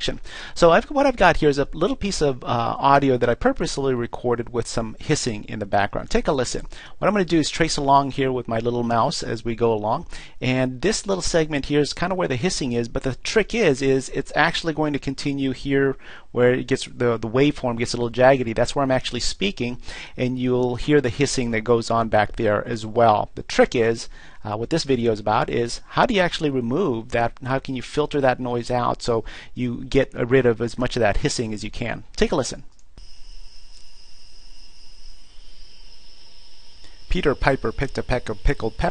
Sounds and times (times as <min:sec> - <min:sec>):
Speech: 0:00.0 - 0:32.7, 0:37.1 - 0:38.9.